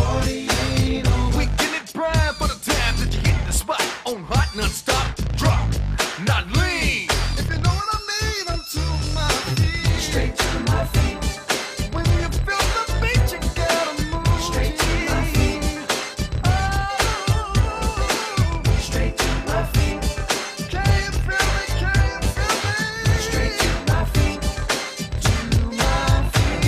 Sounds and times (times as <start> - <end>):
Music: 0.0 - 26.6.